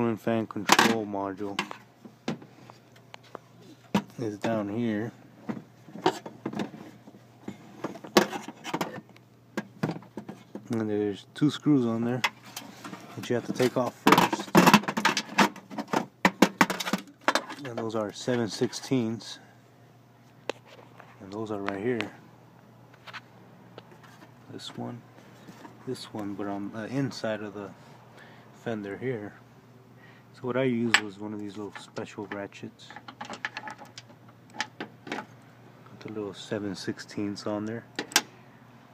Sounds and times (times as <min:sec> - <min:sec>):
Speech: 0:00.0 - 0:01.6, 0:04.1 - 0:05.2, 0:10.7 - 0:12.3, 0:13.2 - 0:14.7, 0:17.5 - 0:19.5, 0:21.2 - 0:22.2, 0:24.5 - 0:25.0, 0:25.8 - 0:27.8, 0:28.6 - 0:29.4, 0:30.4 - 0:33.0, 0:35.9 - 0:37.9.